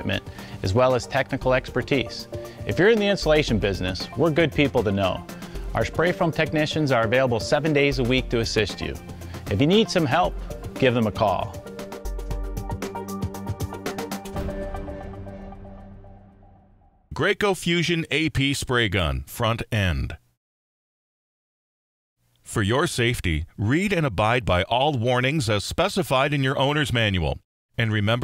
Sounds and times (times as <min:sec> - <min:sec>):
Speech: 0:00.0 - 0:05.2, 0:05.8 - 0:11.6, 0:17.1 - 0:20.2, 0:22.4 - 0:28.2
Music: 0:00.0 - 0:17.1.